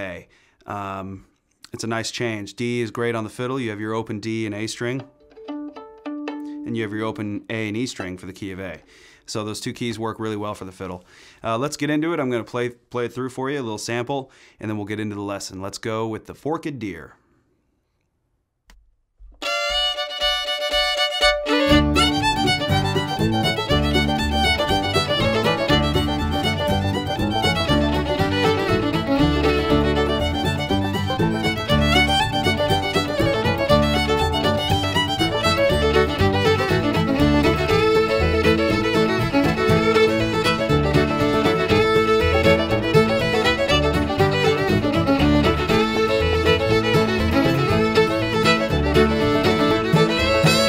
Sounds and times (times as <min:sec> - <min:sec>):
Speech: 0:00.0 - 0:05.1, 0:06.6 - 0:17.2.